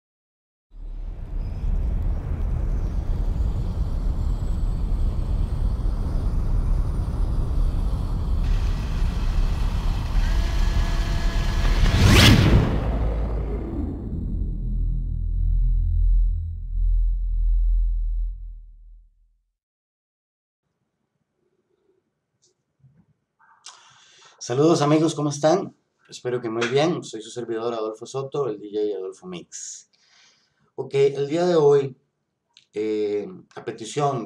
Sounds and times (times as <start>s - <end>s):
Sampler: 2.9s - 18.7s.